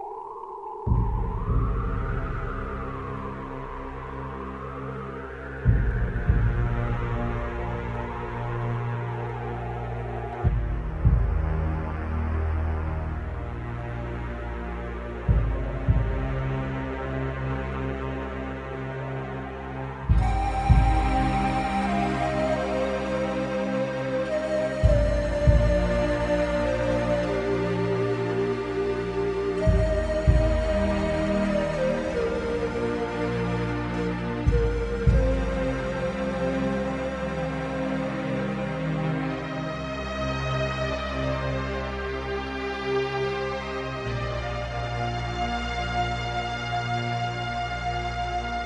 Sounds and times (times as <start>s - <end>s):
Music: 0.0s - 48.6s.